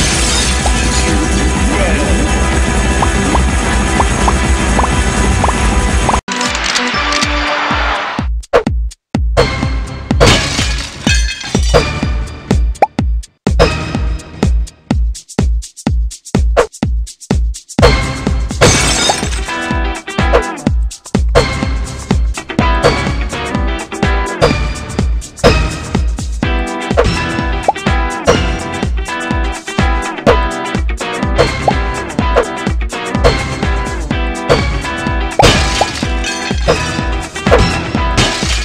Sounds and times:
Music: 0.0s - 38.6s.

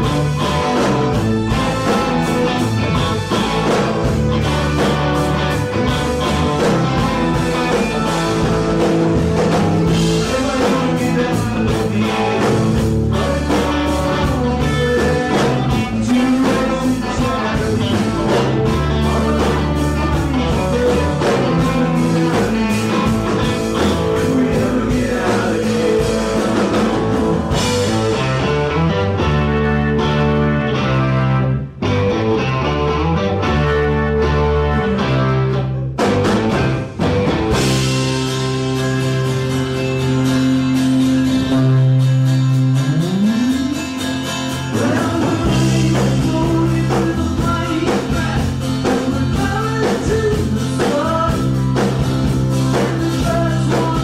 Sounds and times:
Music: 0.0s - 54.0s.

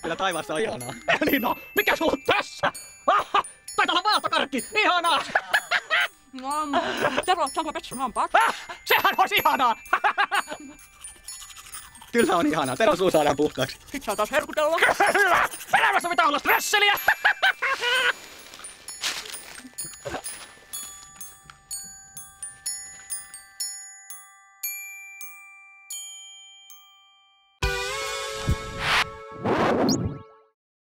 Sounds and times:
Music: 0.0s - 30.6s.

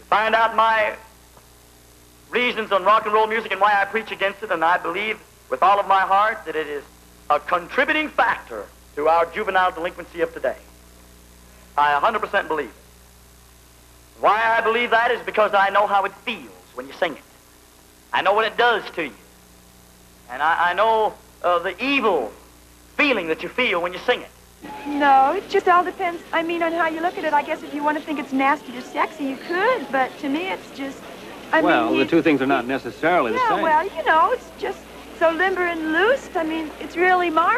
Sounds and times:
Speech: 0.1s - 1.1s, 2.3s - 10.6s, 11.8s - 12.8s, 14.2s - 17.3s, 18.2s - 19.2s, 20.3s - 22.4s, 23.0s - 24.3s, 24.9s - 37.5s.

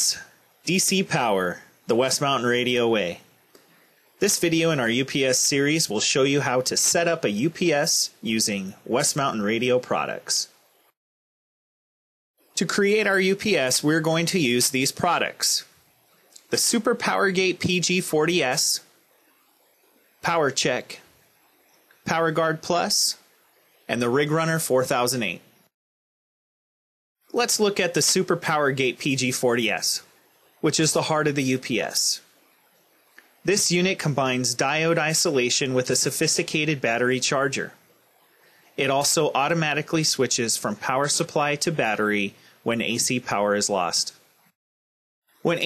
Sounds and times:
Speech: 0.0s - 3.3s, 4.2s - 10.6s, 12.6s - 15.8s, 16.4s - 18.9s, 20.2s - 21.1s, 22.0s - 23.3s, 23.9s - 25.5s, 27.3s - 32.3s, 33.4s - 37.8s, 38.8s - 44.2s, 45.4s - 45.6s.

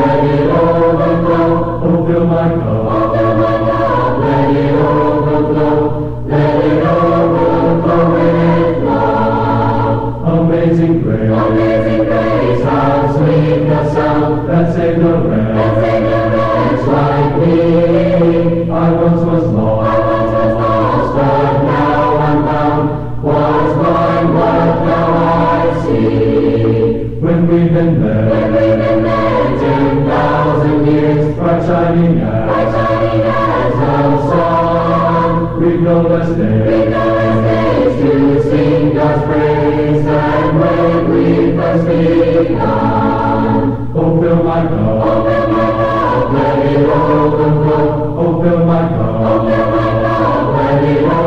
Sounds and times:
Music: 0.0s - 51.2s.

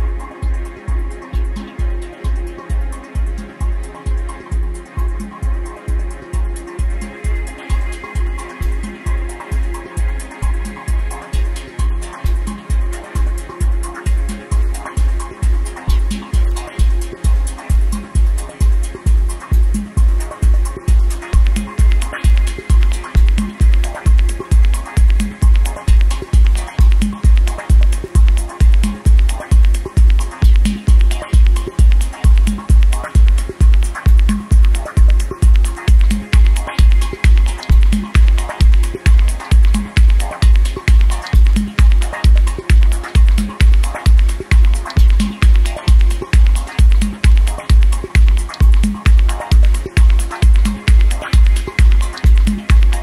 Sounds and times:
Music: 0.0s - 53.0s.

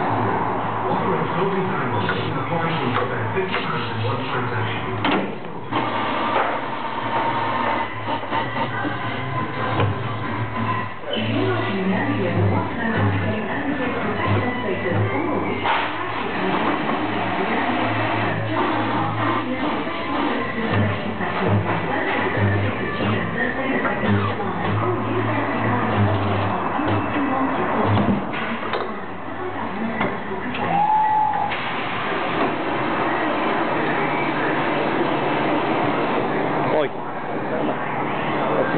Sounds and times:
Speech: 0.1s - 5.7s, 11.1s - 30.8s.

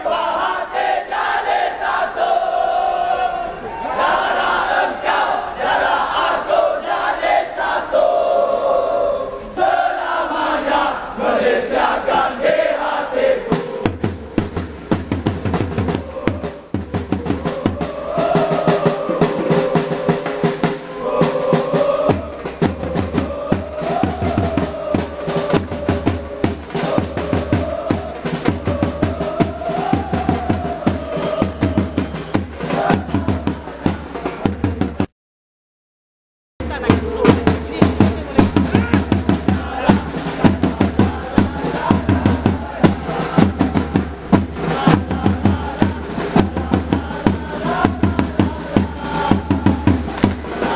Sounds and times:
Choir: 0.0s - 35.1s, 36.7s - 50.7s
Speech: 36.6s - 40.0s.

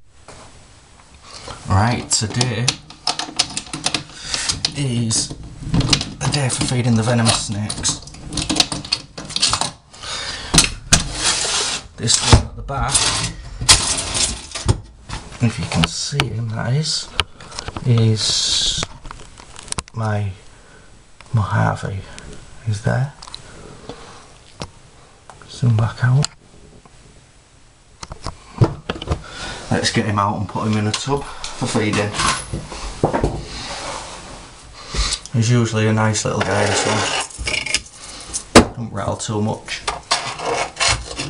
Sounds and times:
Speech: 1.6s - 2.8s, 4.7s - 5.4s, 6.2s - 8.0s, 12.0s - 13.2s, 15.4s - 17.2s, 17.8s - 18.9s, 20.0s - 20.4s, 21.3s - 23.2s, 25.5s - 26.4s, 29.7s - 32.4s, 35.3s - 37.2s, 38.7s - 39.9s.

